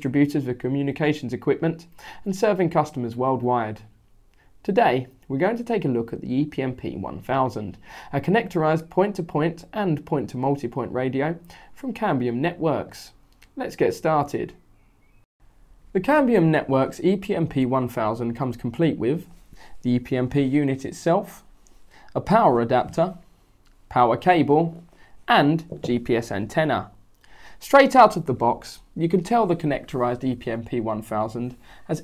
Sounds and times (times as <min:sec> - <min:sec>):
Speech: 0:00.0 - 0:04.0, 0:04.6 - 0:14.6, 0:15.9 - 0:21.5, 0:22.1 - 0:23.2, 0:23.9 - 0:27.0, 0:27.6 - 0:32.0.